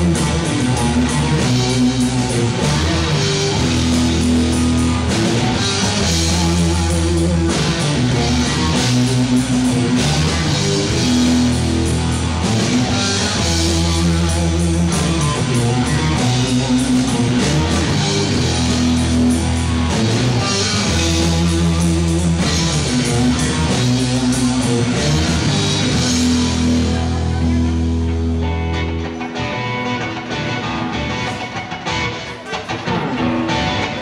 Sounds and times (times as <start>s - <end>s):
Electric guitar: 0.0s - 34.0s.